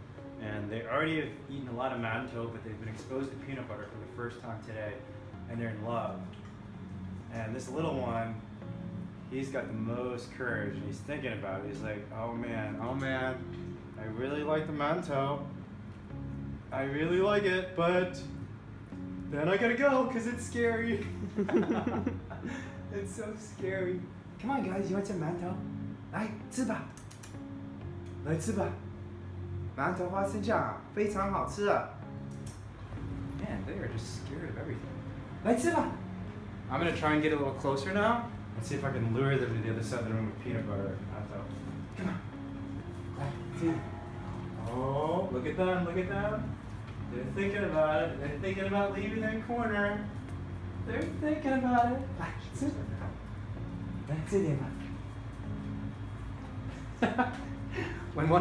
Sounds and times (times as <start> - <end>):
Music: 0.0 - 58.4
Speech: 0.4 - 6.2, 7.3 - 8.4, 9.3 - 13.4.